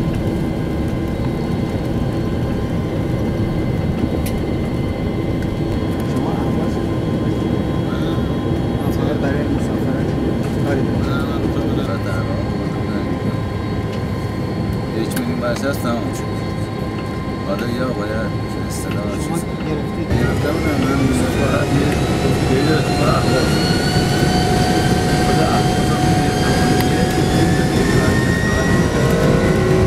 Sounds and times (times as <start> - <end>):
Speech: 6.0 - 13.5, 14.9 - 29.6
Hubbub, speech noise, speech babble: 15.0 - 29.8.